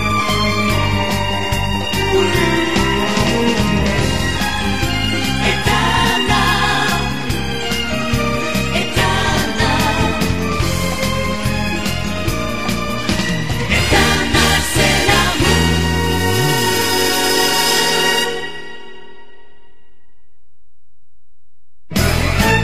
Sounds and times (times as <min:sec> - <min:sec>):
Background music: 0:00.0 - 0:19.8, 0:21.9 - 0:22.6.